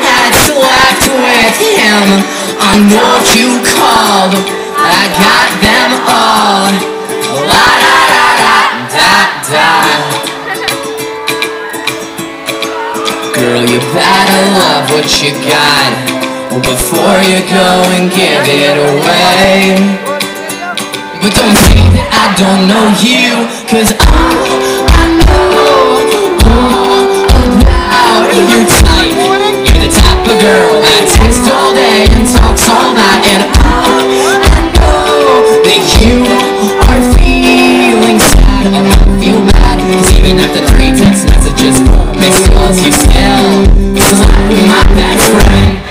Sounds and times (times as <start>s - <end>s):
Music: 0.0s - 45.9s.